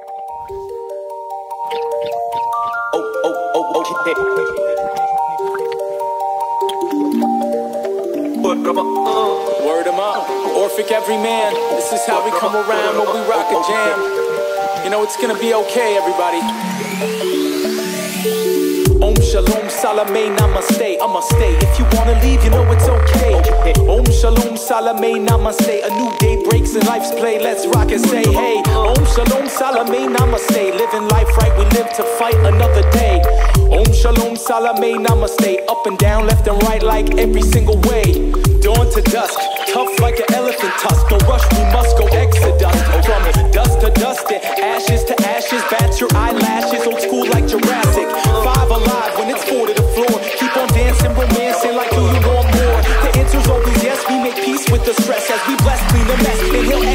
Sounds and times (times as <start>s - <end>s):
Blues: 3.8s - 56.9s.